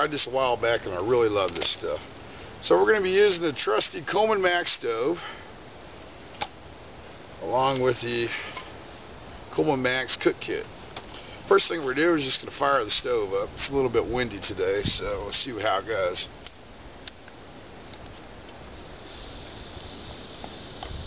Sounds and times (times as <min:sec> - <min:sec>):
Speech: 0:00.0 - 0:05.3, 0:07.4 - 0:08.5, 0:09.5 - 0:10.7, 0:11.5 - 0:16.4.